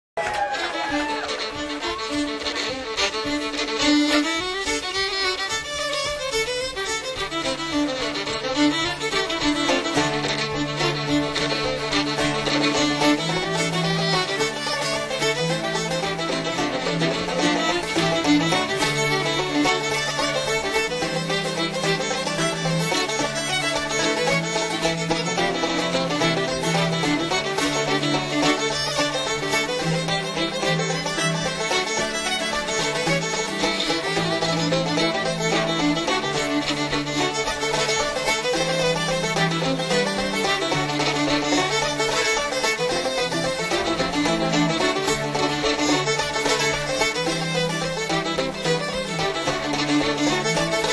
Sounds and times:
Plucked string instrument: 0:00.2 - 0:50.9
String section: 0:00.2 - 0:50.9.

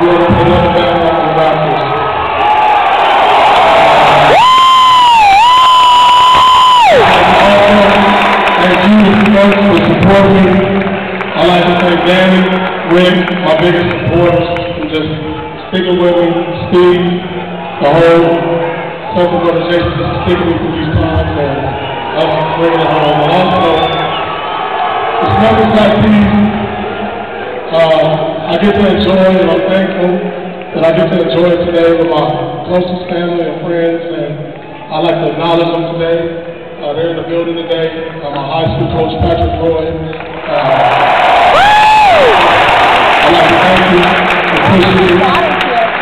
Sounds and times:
Male speech, man speaking: 0:00.0 - 0:02.0, 0:07.2 - 0:10.8, 0:11.4 - 0:17.2, 0:17.8 - 0:24.0, 0:25.2 - 0:26.6, 0:27.7 - 0:30.2, 0:30.8 - 0:40.9, 0:43.2 - 0:45.9.

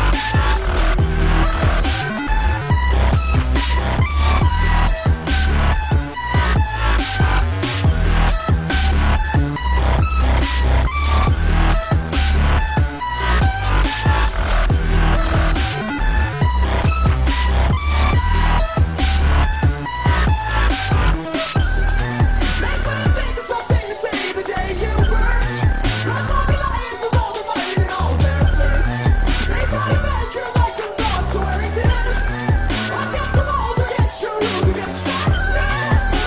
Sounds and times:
Music: 0:00.0 - 0:36.2.

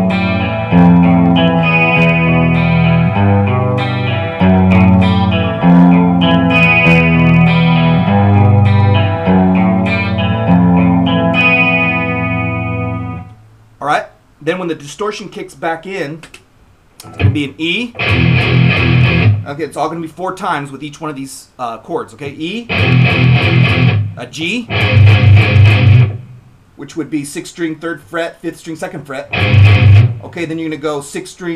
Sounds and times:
Guitar: 0:00.0 - 0:13.4, 0:17.0 - 0:19.6, 0:22.7 - 0:26.5, 0:29.2 - 0:30.6
Effects unit: 0:00.0 - 0:13.5, 0:17.0 - 0:19.5, 0:22.7 - 0:26.6, 0:29.3 - 0:30.3
Inside, small room: 0:00.0 - 0:31.5
Speech: 0:13.8 - 0:16.4, 0:17.0 - 0:18.0, 0:19.4 - 0:22.7, 0:24.2 - 0:24.7, 0:26.8 - 0:29.3, 0:30.2 - 0:31.5.

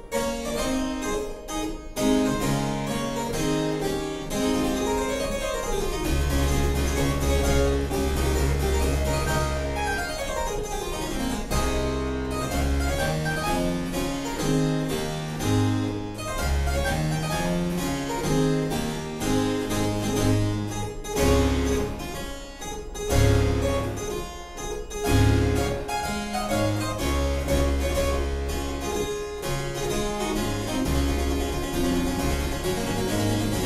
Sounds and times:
Harpsichord: 0:00.0 - 0:33.6.

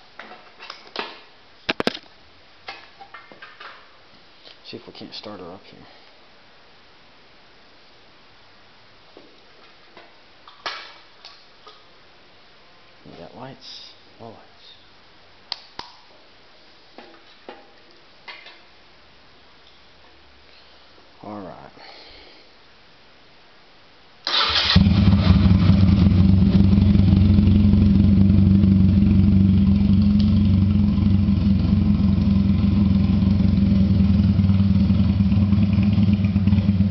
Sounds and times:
Motorcycle: 0:24.4 - 0:36.9.

